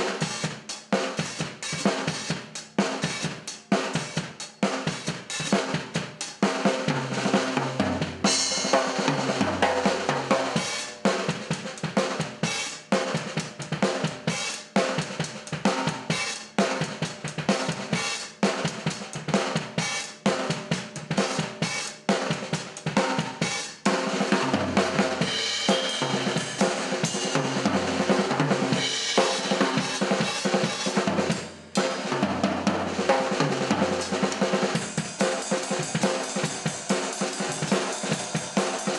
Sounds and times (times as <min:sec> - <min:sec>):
Drum: 0:00.0 - 0:38.9
Drum kit: 0:00.0 - 0:38.9.